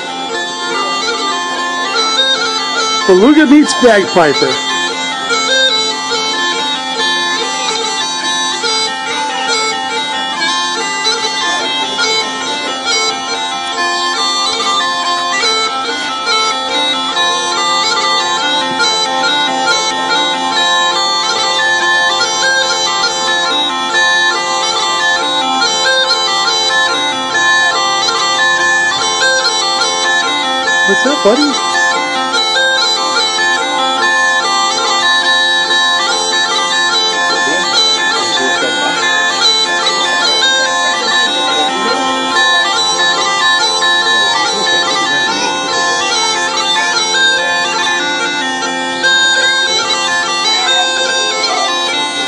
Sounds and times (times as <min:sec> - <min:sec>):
Music: 0:00.0 - 0:52.2.